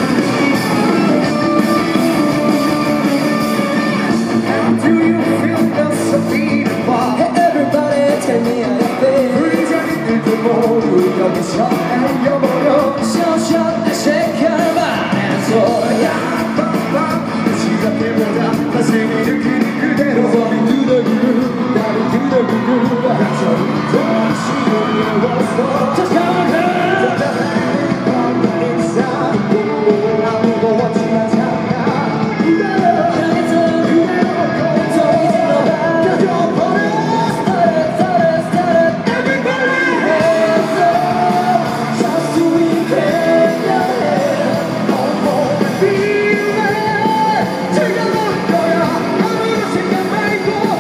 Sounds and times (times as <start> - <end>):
Music: 0.0 - 50.8
Male singing: 3.7 - 50.8.